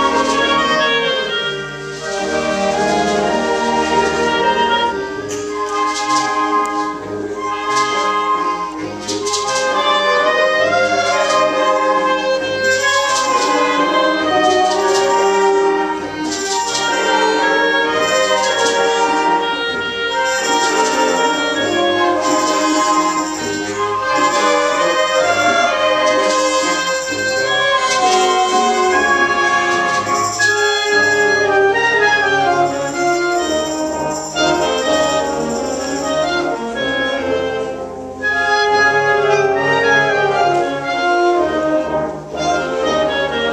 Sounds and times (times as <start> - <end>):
Brass instrument: 0.0 - 43.5
Classical music: 0.0 - 43.5
Jazz: 0.0 - 43.5
Orchestra: 0.0 - 43.5.